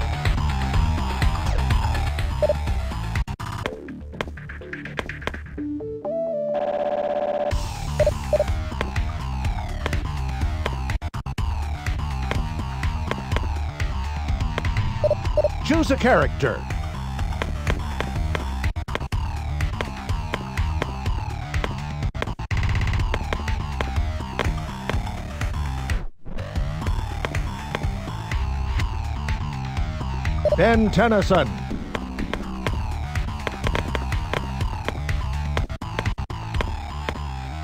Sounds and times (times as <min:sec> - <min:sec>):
Music: 0:00.0 - 0:37.6
Speech: 0:15.6 - 0:16.7, 0:30.5 - 0:31.6.